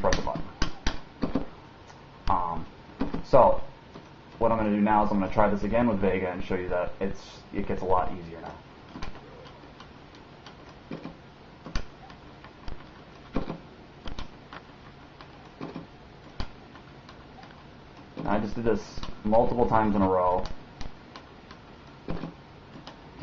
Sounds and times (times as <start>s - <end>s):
Speech: 0.0s - 0.5s, 2.3s - 2.7s, 3.3s - 3.7s, 4.4s - 8.6s, 18.2s - 20.6s.